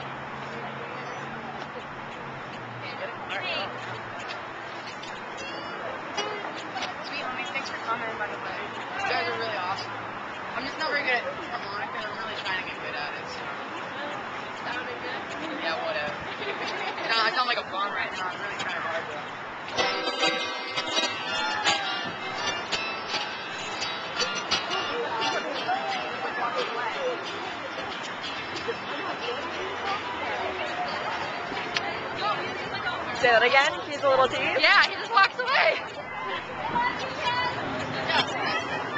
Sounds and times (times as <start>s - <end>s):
Speech: 10.5s - 19.4s, 24.8s - 28.0s, 28.6s - 38.9s.